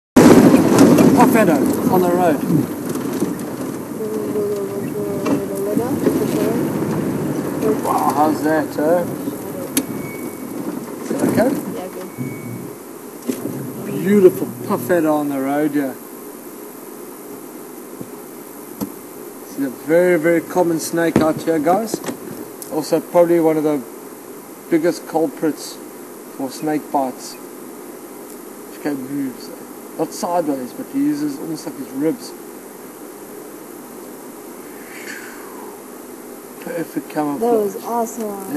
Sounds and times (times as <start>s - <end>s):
Vehicle: 0.2s - 16.0s
Speech: 1.1s - 2.6s, 4.0s - 6.7s, 7.6s - 9.8s, 11.0s - 12.1s, 13.8s - 16.0s, 19.5s - 22.0s, 26.4s - 27.4s, 28.7s - 32.4s, 36.6s - 38.5s.